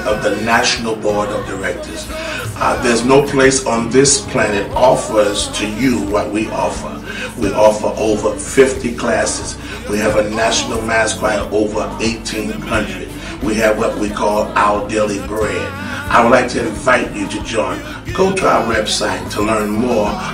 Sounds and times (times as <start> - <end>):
Gospel music: 0.0 - 20.3
Speech: 0.0 - 20.3.